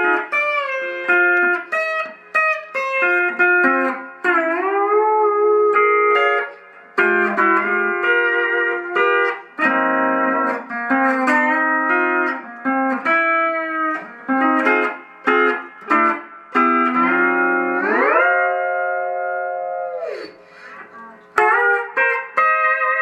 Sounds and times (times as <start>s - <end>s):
Steel guitar, slide guitar: 0.0s - 23.0s.